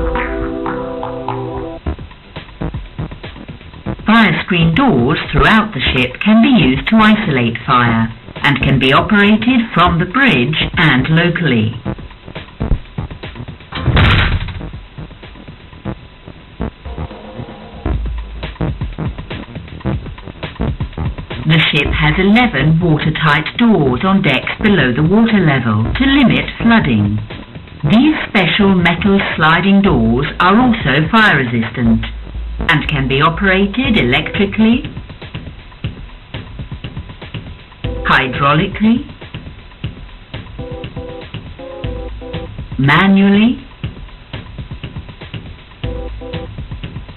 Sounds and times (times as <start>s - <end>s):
Music: 0.0s - 47.1s
Speech: 4.1s - 11.8s, 21.5s - 27.3s, 27.9s - 34.9s, 38.0s - 39.1s, 42.8s - 43.7s.